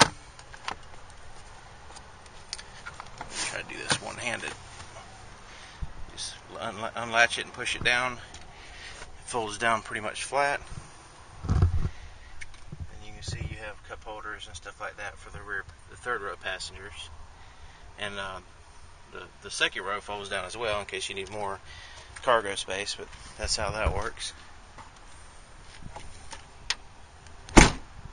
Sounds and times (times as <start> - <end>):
Speech: 3.5 - 4.6, 6.1 - 8.2, 9.2 - 10.7, 12.9 - 17.1, 18.0 - 18.5, 19.1 - 21.6, 22.2 - 24.4.